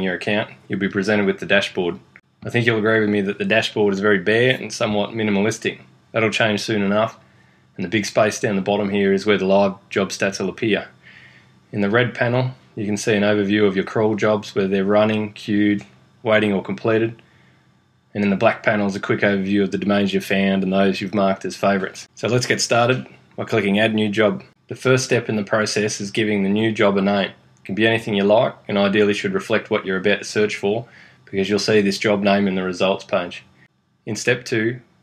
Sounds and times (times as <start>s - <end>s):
Speech: 0.0s - 7.2s, 7.8s - 11.0s, 11.7s - 17.2s, 18.1s - 33.5s, 34.1s - 34.9s.